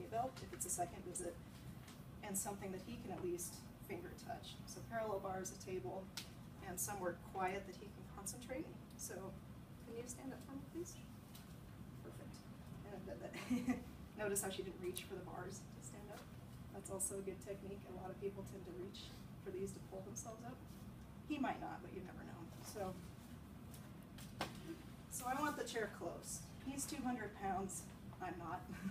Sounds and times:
Speech: 0.0s - 1.4s, 2.2s - 11.1s, 12.0s - 13.5s, 14.2s - 20.6s, 21.3s - 23.1s, 25.1s - 28.9s.

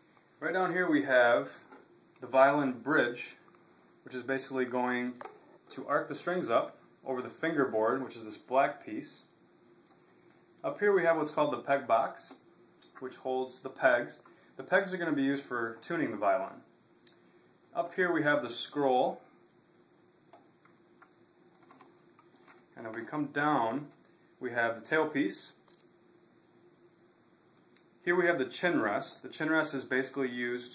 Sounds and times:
Speech: 0.4s - 9.3s, 10.6s - 16.7s, 17.7s - 19.3s, 22.8s - 25.6s, 28.0s - 30.7s.

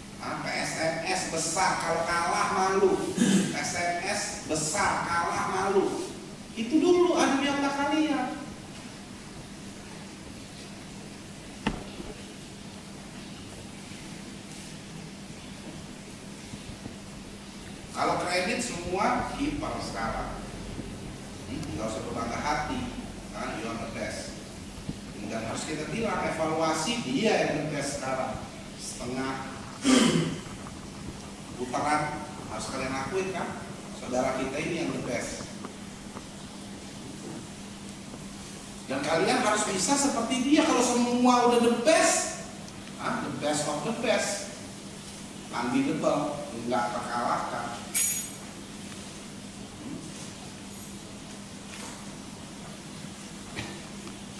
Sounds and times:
Narration, monologue: 0.0s - 53.4s
Male speech, man speaking: 0.2s - 8.5s, 18.0s - 20.6s, 21.4s - 24.4s, 25.2s - 30.0s, 31.6s - 35.5s, 38.9s - 44.6s, 45.5s - 47.9s.

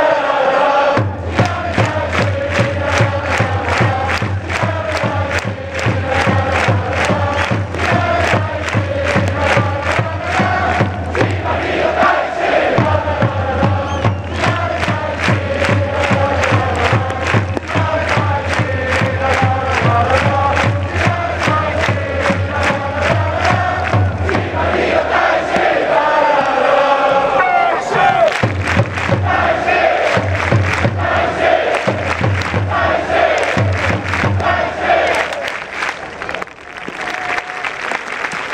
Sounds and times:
Mantra: 0.0s - 28.3s, 29.1s - 35.5s.

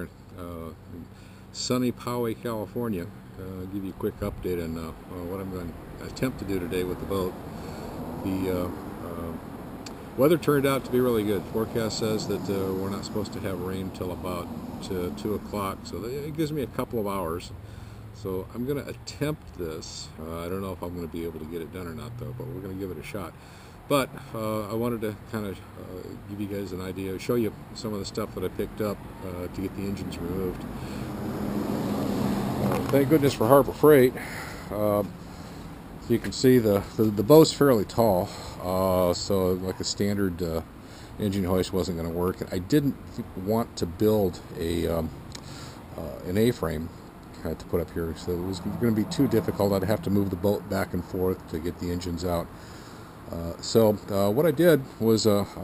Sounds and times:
Speech: 0.0s - 7.4s, 8.2s - 9.4s, 10.2s - 17.5s, 18.2s - 30.6s, 32.7s - 35.1s, 36.0s - 45.2s, 45.9s - 52.5s, 53.3s - 55.6s.

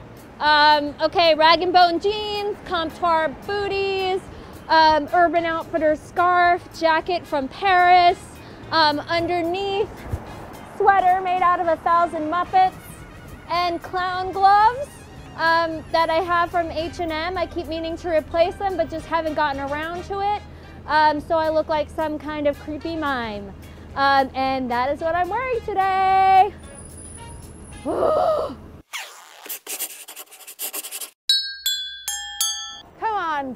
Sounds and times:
Music: 0.0s - 28.8s
Outside, urban or manmade: 0.0s - 33.5s
Speech: 0.4s - 8.2s, 13.5s - 26.5s, 33.0s - 33.5s.

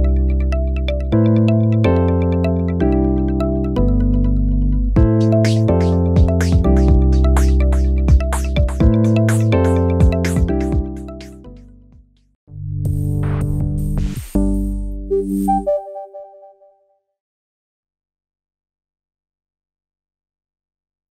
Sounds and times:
Music: 0.0s - 17.0s.

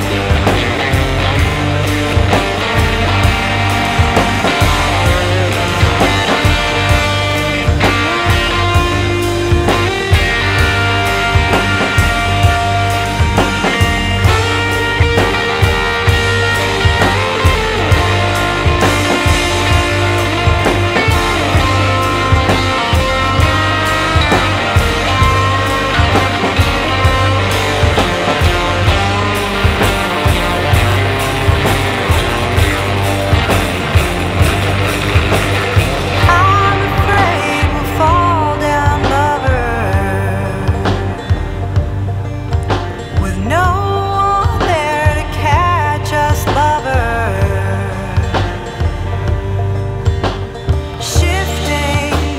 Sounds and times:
Psychedelic rock: 0.0s - 52.3s.

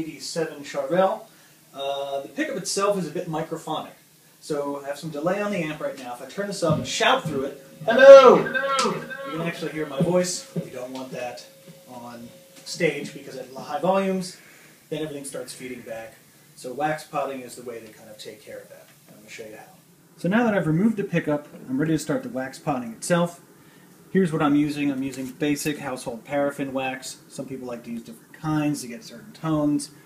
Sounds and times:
Speech: 0.0s - 23.5s, 24.1s - 30.0s.

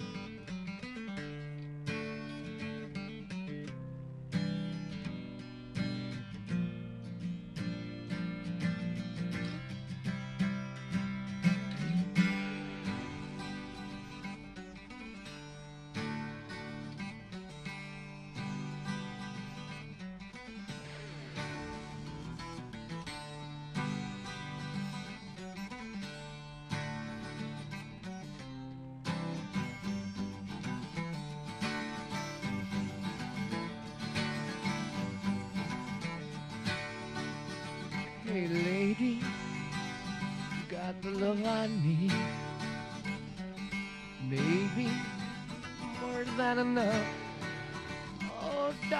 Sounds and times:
Acoustic guitar: 0.0s - 48.9s
Strum: 0.0s - 48.9s.

